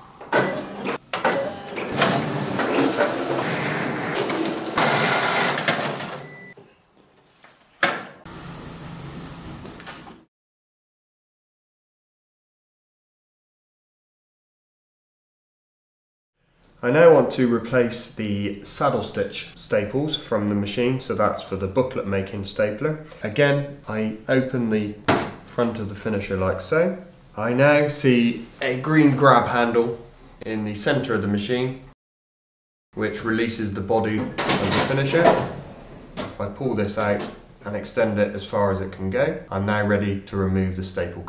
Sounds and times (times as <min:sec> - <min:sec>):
Speech: 0:16.8 - 0:31.9, 0:33.0 - 0:35.5, 0:36.3 - 0:41.2.